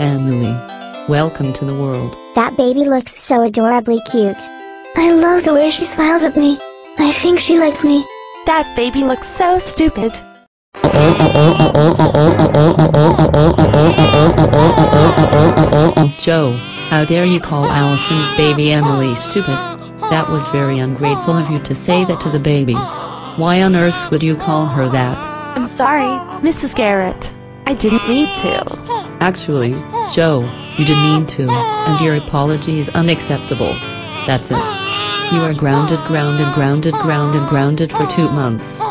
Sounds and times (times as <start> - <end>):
Speech: 0.0 - 10.2, 10.8 - 38.9
Music: 0.0 - 38.9.